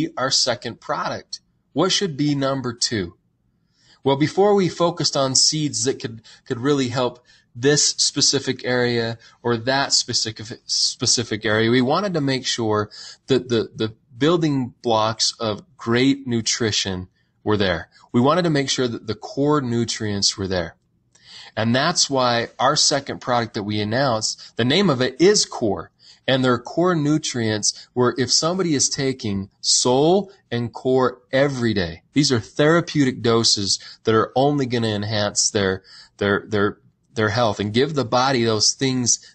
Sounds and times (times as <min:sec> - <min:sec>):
Speech: 0:00.0 - 0:03.2, 0:04.0 - 0:20.8, 0:21.5 - 0:39.3.